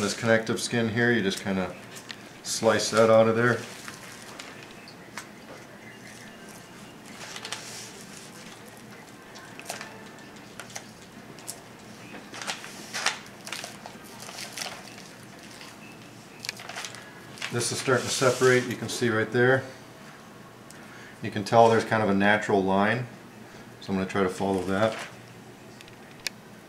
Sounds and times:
Speech: 0.0s - 1.8s, 2.4s - 3.7s, 17.5s - 19.8s, 21.2s - 23.1s, 23.8s - 25.1s.

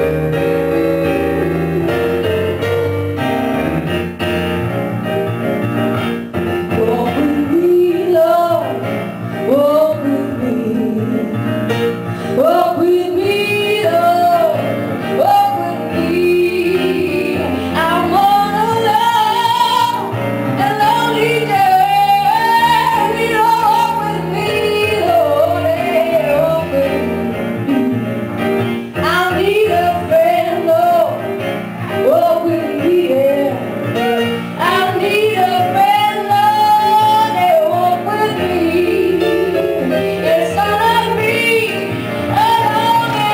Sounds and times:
Music: 0.0s - 43.3s.

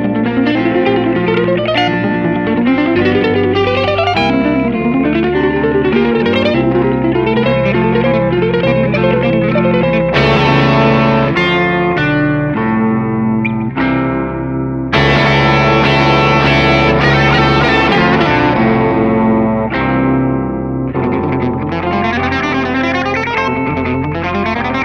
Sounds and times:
Effects unit: 0.0s - 24.8s
Electric guitar: 0.0s - 24.8s.

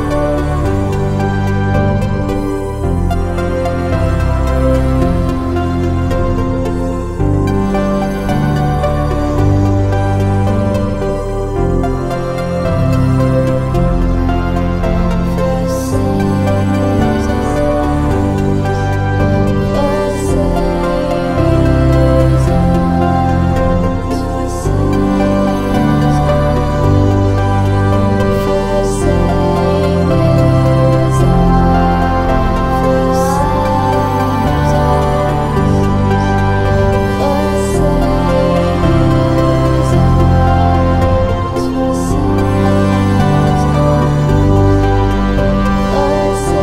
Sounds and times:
New-age music: 0.0s - 46.6s.

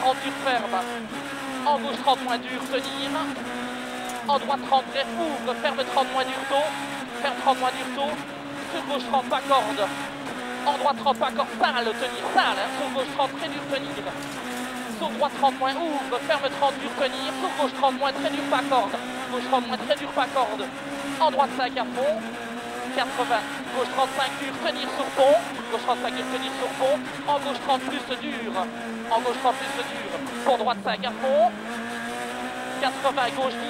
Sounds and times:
Speech: 0.0s - 1.0s, 1.6s - 3.4s, 4.2s - 10.0s, 10.7s - 14.2s, 14.9s - 22.3s, 22.9s - 31.6s, 32.8s - 33.6s.

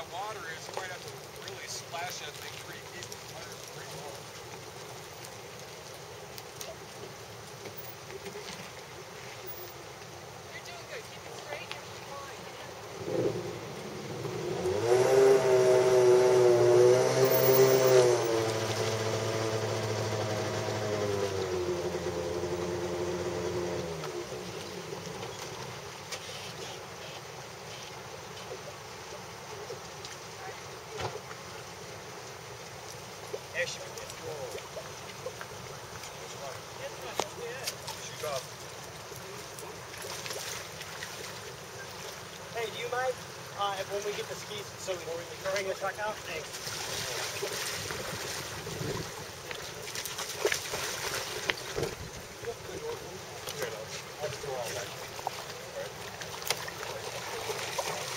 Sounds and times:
Outside, urban or manmade: 0.0s - 58.1s.

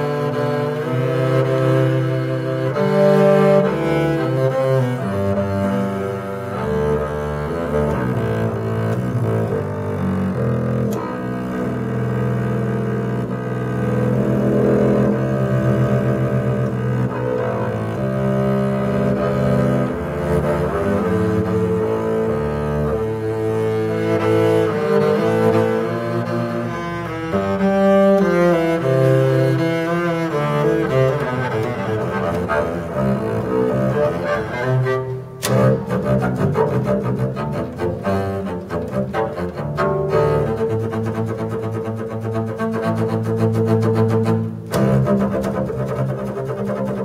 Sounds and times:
Cello: 0.0s - 47.0s
Double bass: 0.0s - 47.0s.

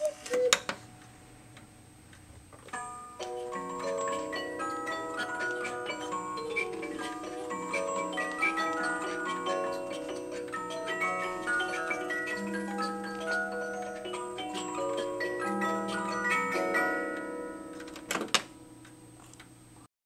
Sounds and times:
Music: 2.7s - 19.2s.

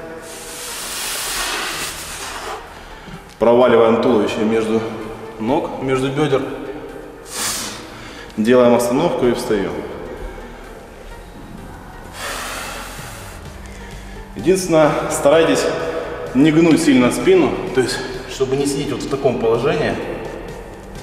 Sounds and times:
Music: 0.0s - 21.0s
Speech: 3.4s - 6.5s, 14.4s - 15.8s, 16.4s - 20.2s.

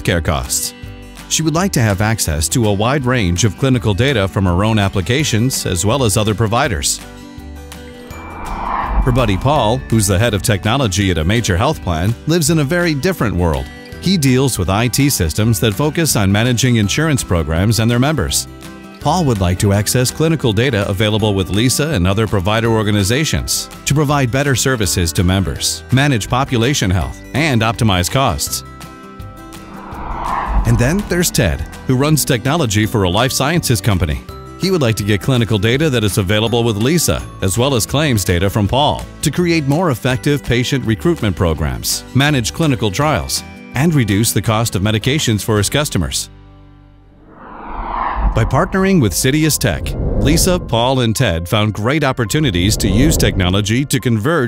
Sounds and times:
Speech: 0.0s - 7.0s, 9.1s - 28.7s, 30.6s - 46.3s, 48.4s - 54.4s
Music: 0.0s - 47.3s, 47.9s - 54.4s.

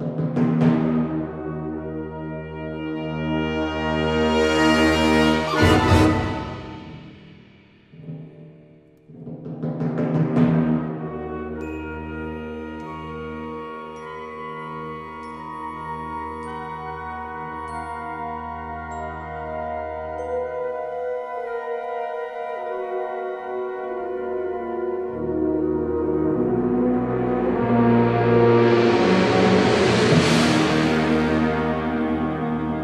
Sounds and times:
Timpani: 0.0s - 32.8s.

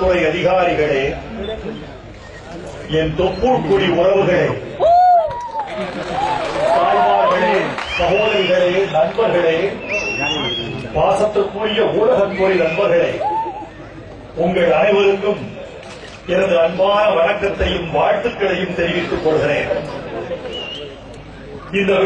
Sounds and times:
Male speech, man speaking: 0.0s - 1.8s, 2.6s - 4.6s, 6.7s - 13.2s, 14.4s - 15.6s, 16.3s - 20.0s, 21.7s - 22.0s.

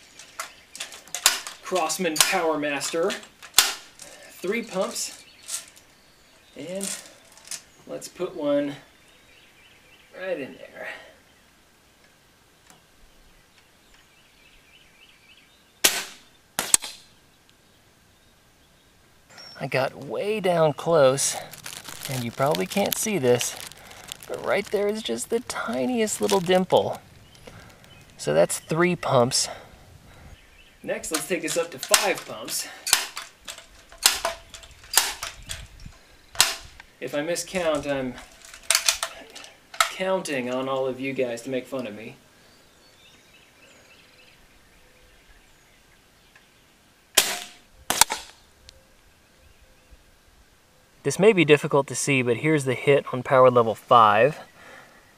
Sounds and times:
Cap gun: 3.6s - 3.9s, 15.8s - 17.1s, 47.2s - 48.4s.

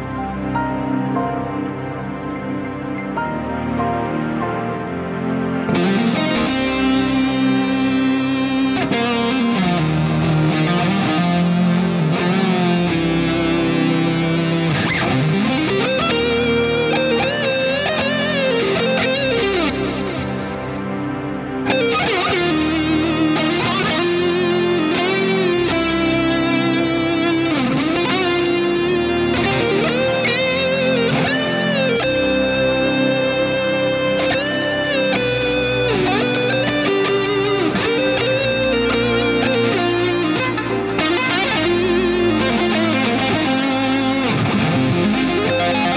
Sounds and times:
Progressive rock: 0.0s - 45.9s.

